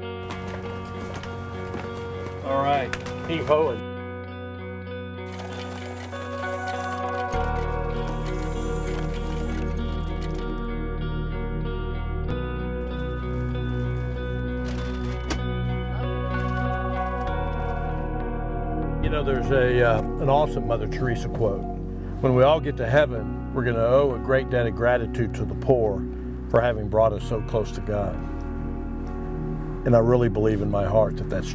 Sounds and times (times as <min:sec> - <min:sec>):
Music: 0:00.0 - 0:31.5
Speech: 0:02.4 - 0:03.8, 0:19.0 - 0:28.2, 0:29.9 - 0:31.5.